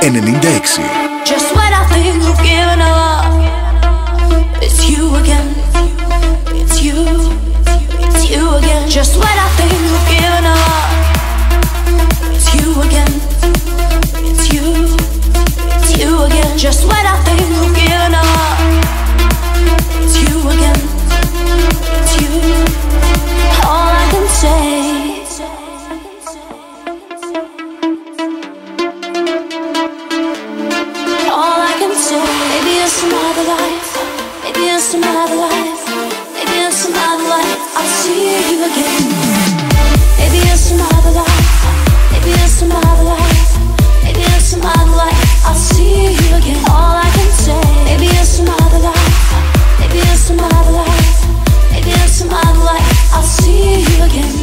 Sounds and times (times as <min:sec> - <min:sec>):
Music: 0:00.0 - 0:54.4.